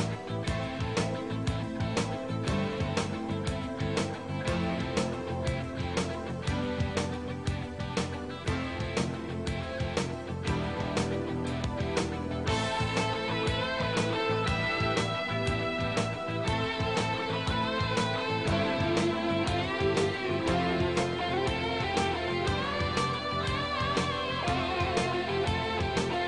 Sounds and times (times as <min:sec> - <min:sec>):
Music: 0:00.0 - 0:26.2.